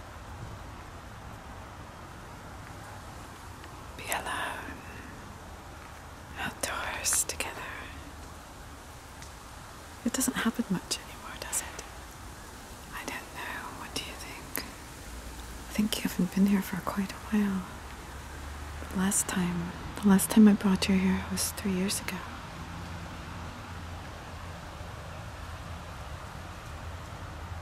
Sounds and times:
Whispering: 4.0s - 5.2s, 6.4s - 8.1s, 10.1s - 12.0s, 12.9s - 14.8s, 15.7s - 17.8s, 18.9s - 22.4s.

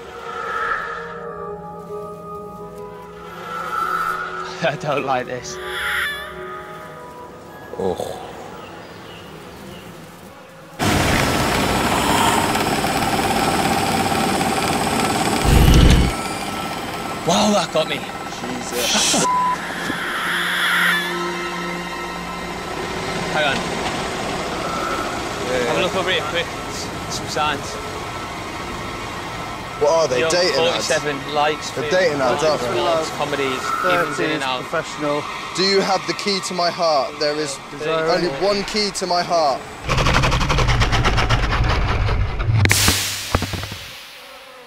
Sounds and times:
Music: 0.0s - 10.8s, 17.7s - 25.4s
Outside, rural or natural: 0.0s - 36.6s, 37.4s - 44.6s.

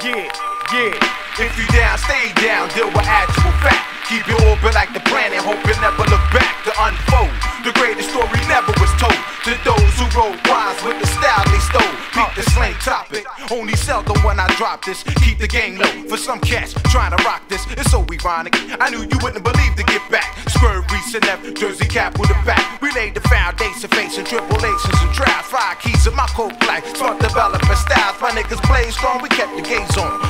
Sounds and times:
Music: 0.0s - 30.3s.

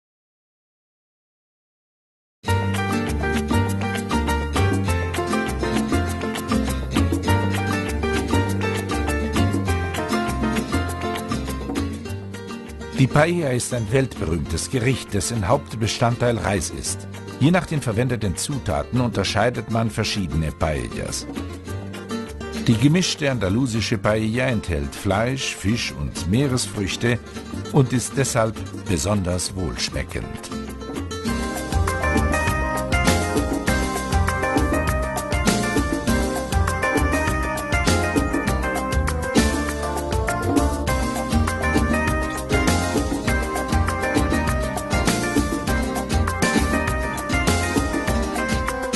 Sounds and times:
Music: 2.4s - 48.9s
Male speech, man speaking: 13.0s - 21.3s, 22.6s - 30.6s.

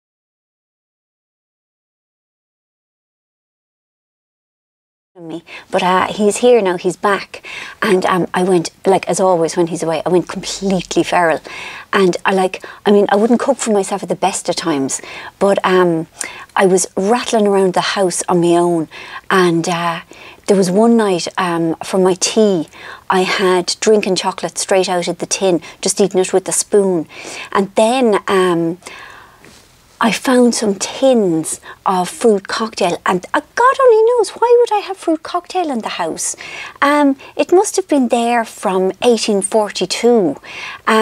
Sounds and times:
Speech: 5.2s - 28.8s, 30.0s - 41.0s.

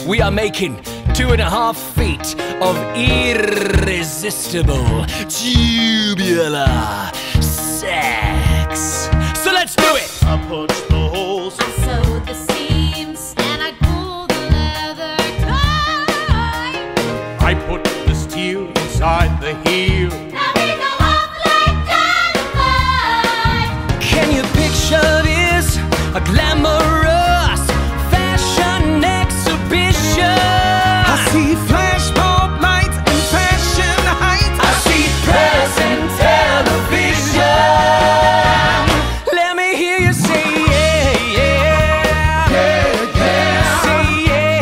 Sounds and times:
Music: 0.0s - 44.6s.

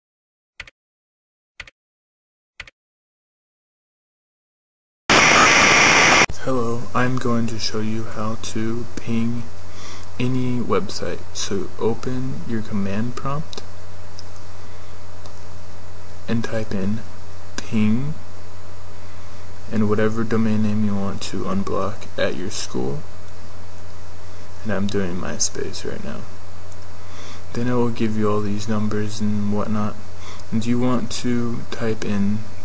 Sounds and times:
Speech: 6.3s - 9.5s, 10.2s - 13.6s, 16.3s - 18.2s, 19.7s - 23.1s, 24.6s - 26.3s, 27.5s - 32.5s.

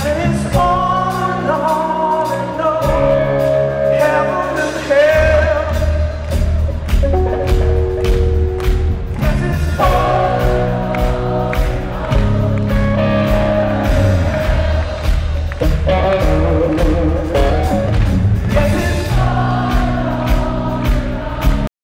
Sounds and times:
Male singing: 0.0s - 6.3s, 9.2s - 12.5s, 18.5s - 21.7s
Choir: 9.3s - 15.6s, 18.5s - 21.7s.

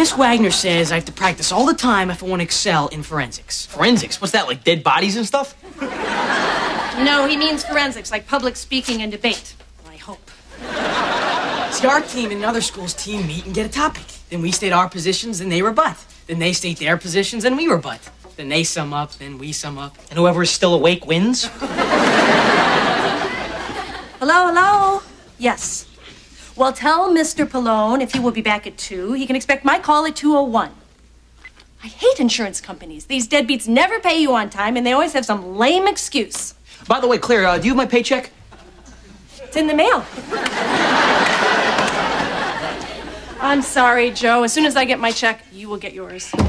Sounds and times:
Speech: 7.0s - 10.2s, 11.7s - 21.5s, 31.8s - 38.4s, 43.4s - 46.4s.

